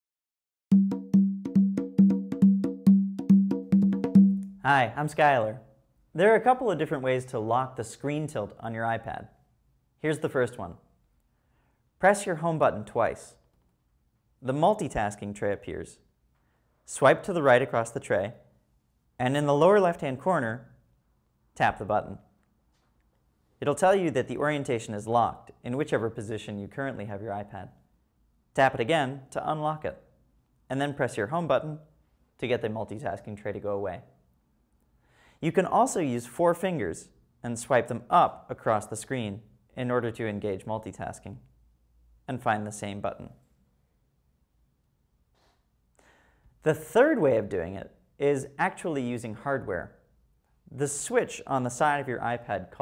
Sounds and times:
Wood block: 0.7 - 4.6
Speech: 4.6 - 9.4, 10.0 - 10.9, 12.0 - 13.4, 14.4 - 16.0, 16.9 - 18.4, 19.2 - 20.8, 21.6 - 22.3, 23.6 - 27.8, 28.6 - 30.1, 30.7 - 34.1, 35.4 - 41.5, 42.3 - 43.4, 46.6 - 50.0, 50.7 - 52.8.

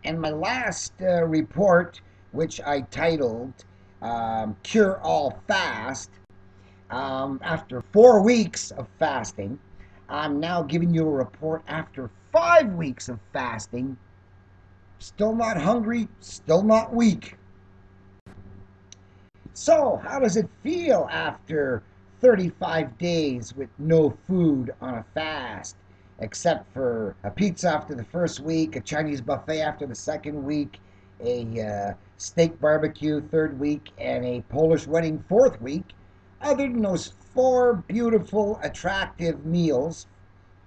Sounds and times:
Speech: 0.0 - 6.1, 6.9 - 14.0, 15.0 - 17.4, 19.5 - 40.0.

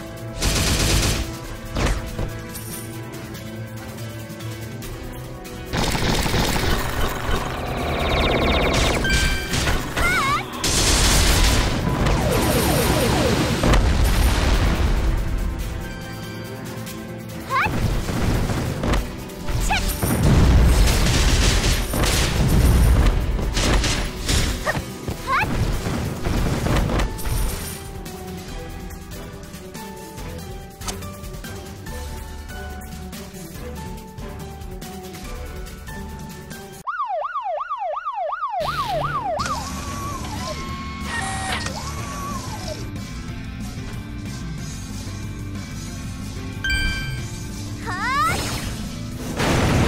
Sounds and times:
Police car (siren): 11.7 - 13.8, 36.8 - 42.8.

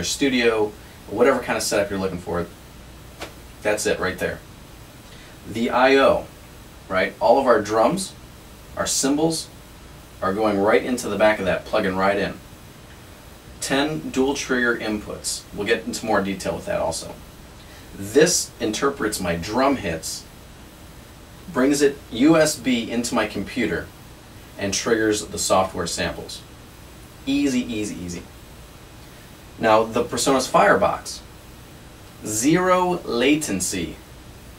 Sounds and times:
Speech: 0.0 - 2.6, 3.6 - 4.5, 5.4 - 6.3, 6.9 - 8.2, 8.8 - 9.6, 10.2 - 12.4, 13.6 - 17.2, 18.0 - 20.3, 21.5 - 23.9, 24.6 - 26.5, 27.2 - 28.3, 29.6 - 31.3, 32.2 - 34.0.

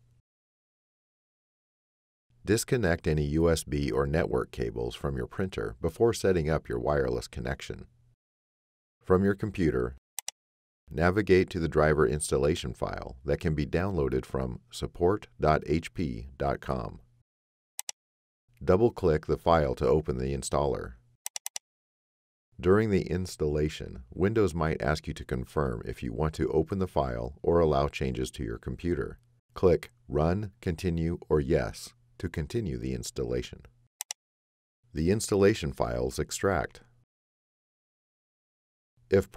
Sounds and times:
Speech: 2.5 - 7.9, 9.0 - 10.0, 10.9 - 17.0, 18.6 - 21.0, 22.6 - 33.7, 35.0 - 36.8, 39.1 - 39.3.

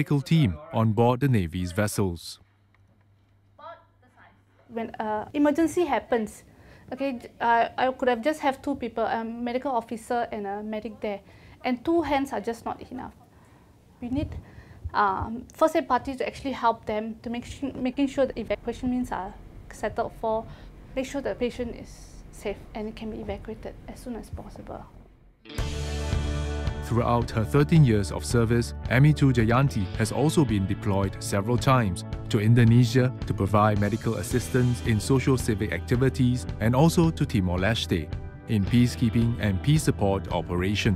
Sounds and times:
Speech: 0.0 - 2.4, 15.0 - 24.9, 26.9 - 40.9.

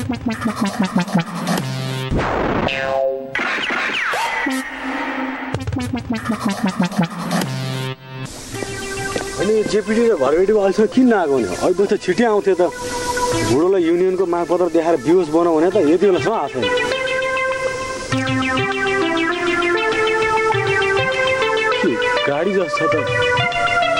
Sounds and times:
Music: 0.0 - 2.5, 3.1 - 23.9
Outside, urban or manmade: 0.0 - 23.9
Speech: 9.4 - 12.8, 13.5 - 16.7, 21.8 - 23.1.

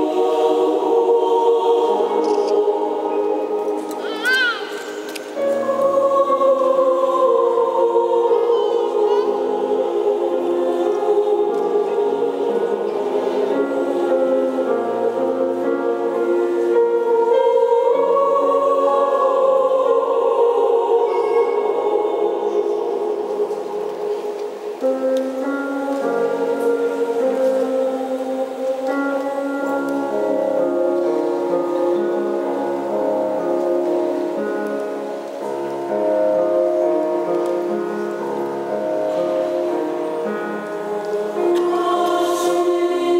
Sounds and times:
Lullaby: 0.0 - 43.1.

